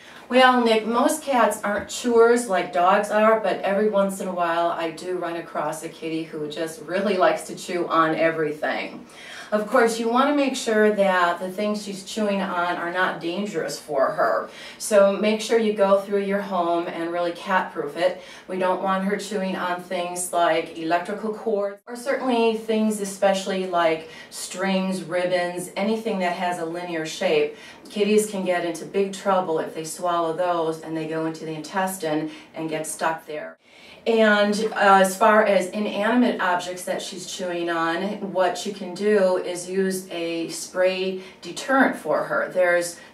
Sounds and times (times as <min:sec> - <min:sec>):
Speech: 0:00.2 - 0:43.1.